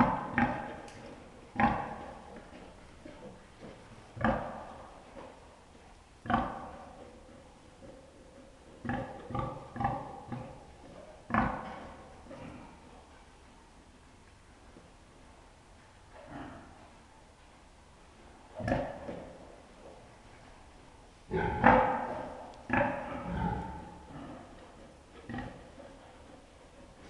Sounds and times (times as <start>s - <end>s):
Oink: 0.0s - 3.4s, 4.2s - 5.4s, 6.2s - 13.0s, 16.2s - 16.9s, 18.6s - 19.5s, 21.3s - 27.0s.